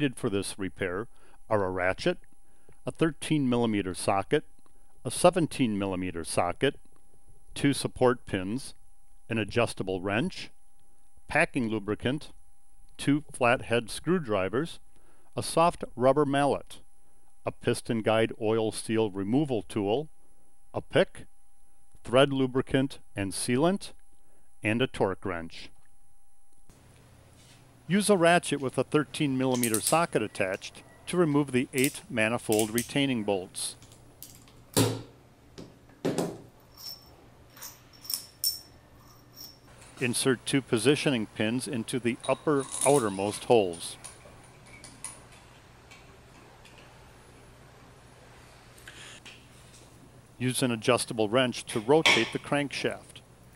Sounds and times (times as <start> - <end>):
Speech: 0.0 - 2.2, 2.9 - 6.8, 7.6 - 10.6, 11.3 - 12.4, 13.0 - 14.8, 15.4 - 16.8, 17.5 - 20.1, 20.8 - 21.3, 22.0 - 24.0, 24.6 - 25.8, 27.9 - 33.8, 40.0 - 44.0, 50.4 - 53.2.